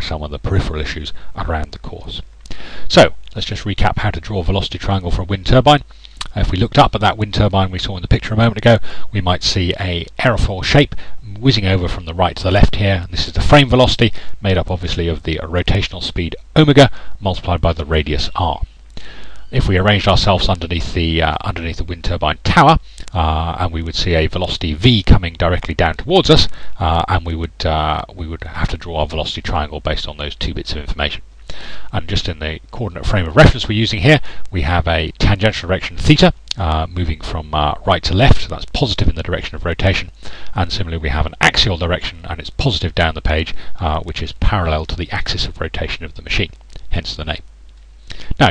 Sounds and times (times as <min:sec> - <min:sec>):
Speech: 0:00.0 - 0:02.3, 0:02.9 - 0:18.7, 0:19.5 - 0:31.2, 0:31.9 - 0:47.5, 0:48.1 - 0:48.5.